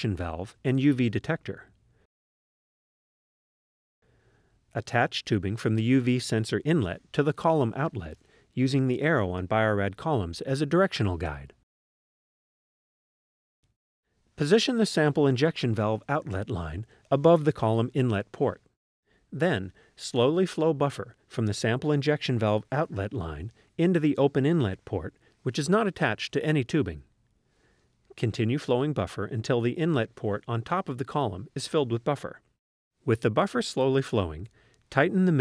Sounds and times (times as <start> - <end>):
Speech: 0.0 - 1.7, 4.8 - 11.6, 14.4 - 18.7, 19.4 - 27.1, 28.1 - 32.5, 33.1 - 35.4.